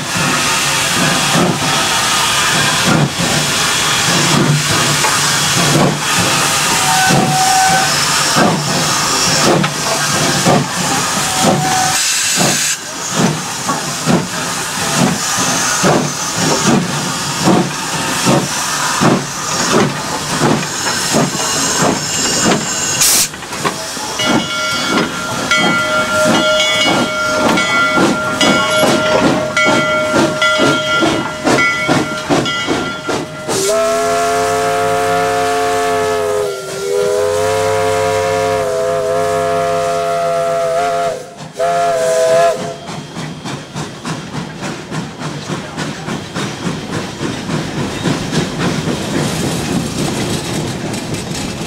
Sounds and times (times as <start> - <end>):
Steam whistle: 6.4 - 8.4, 11.1 - 12.8, 33.5 - 43.0.